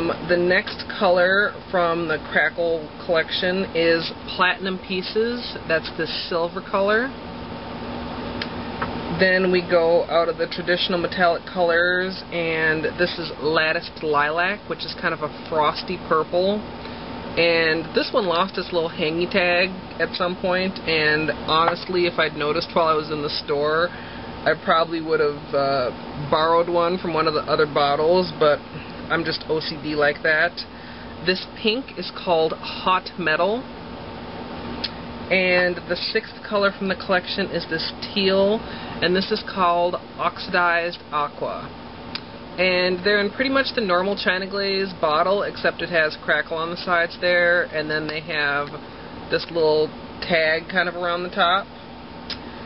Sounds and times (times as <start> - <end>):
Speech: 0.0 - 7.2, 9.1 - 16.7, 17.4 - 33.7, 35.3 - 41.8, 42.6 - 51.7.